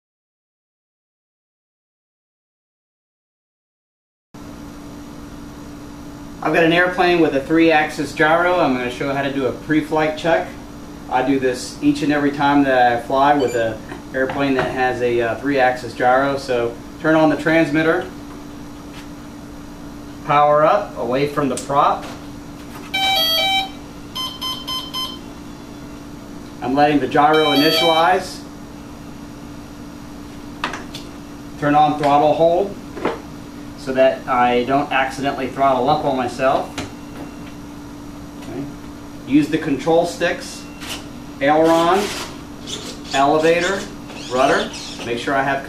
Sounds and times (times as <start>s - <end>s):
Speech: 6.4s - 18.2s, 20.2s - 22.2s, 26.6s - 28.5s, 31.6s - 32.8s, 33.8s - 36.8s, 38.4s - 40.7s, 41.4s - 42.1s, 43.1s - 45.6s
Music: 23.0s - 23.8s, 27.4s - 28.0s.